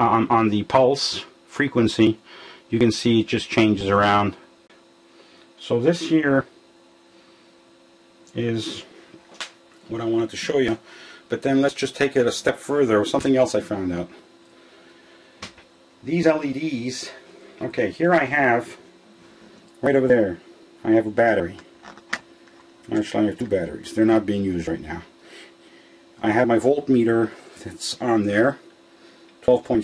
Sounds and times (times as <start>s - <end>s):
Speech: 0.0s - 4.5s, 5.6s - 6.6s, 8.3s - 9.0s, 9.9s - 14.2s, 16.0s - 18.8s, 19.8s - 21.7s, 22.9s - 25.2s, 26.2s - 28.7s, 29.4s - 29.8s.